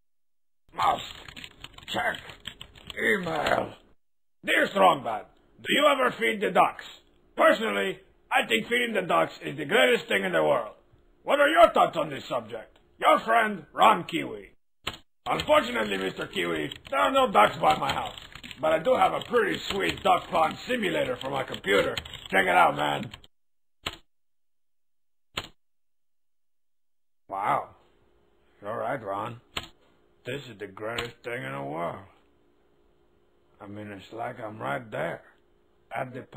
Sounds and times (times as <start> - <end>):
Speech: 0.7 - 1.3, 1.9 - 3.8, 4.4 - 14.6, 15.3 - 23.2, 27.3 - 27.8, 28.6 - 29.5, 30.2 - 32.2, 33.6 - 36.3.